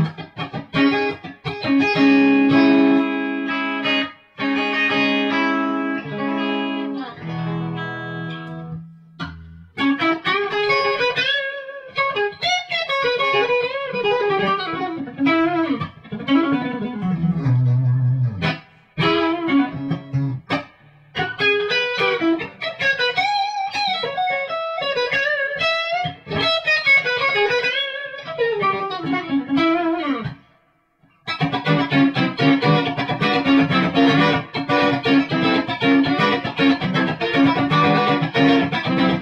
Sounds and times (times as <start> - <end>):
Electric guitar: 0.0 - 39.2.